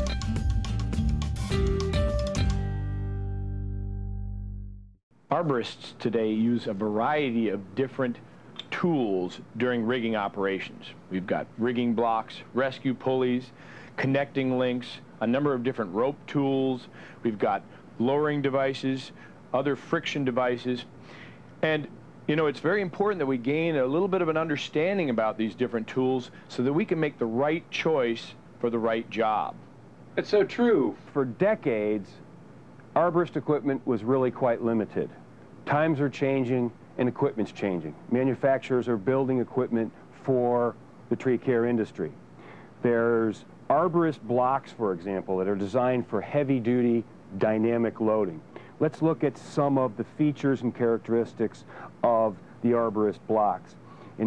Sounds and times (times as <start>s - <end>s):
Speech: 5.3s - 20.9s, 21.6s - 29.6s, 30.2s - 32.3s, 33.0s - 42.2s, 42.8s - 54.2s.